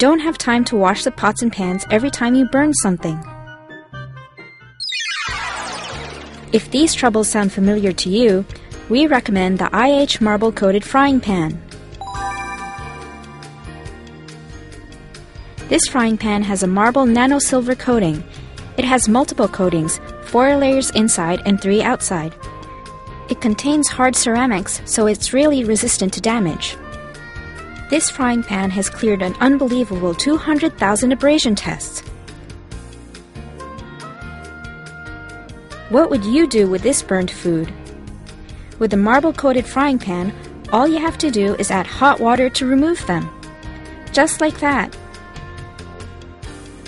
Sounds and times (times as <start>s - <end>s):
Speech: 0.0s - 3.2s, 6.6s - 11.6s, 15.7s - 18.2s, 18.8s - 22.4s, 23.3s - 26.8s, 27.9s - 32.0s, 35.9s - 37.8s, 38.8s - 43.3s, 44.1s - 44.9s
Music: 0.0s - 46.8s.